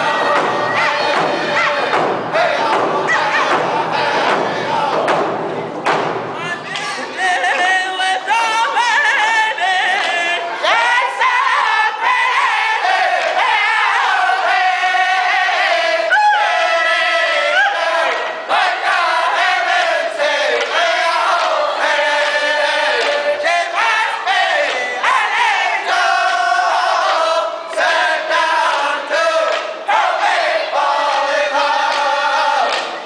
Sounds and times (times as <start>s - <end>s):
Music: 0.0s - 8.5s
Thump, thud: 0.2s - 6.4s.